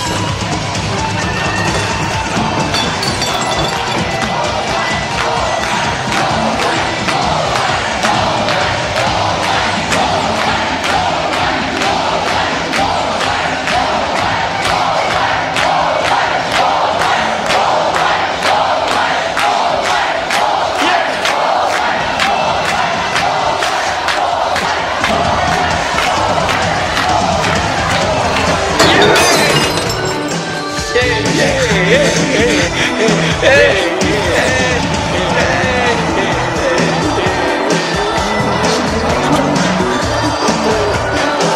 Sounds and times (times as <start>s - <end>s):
Inside, public space: 0.0s - 41.5s
Music: 0.0s - 41.5s.